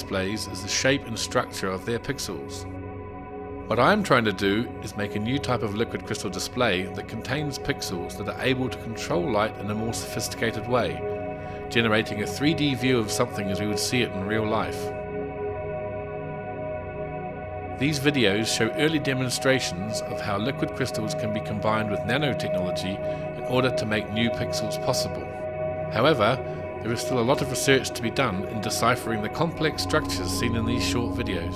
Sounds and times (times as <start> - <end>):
Speech: 0.0 - 2.7, 3.7 - 11.1, 11.7 - 14.9, 17.8 - 25.3, 25.9 - 31.5.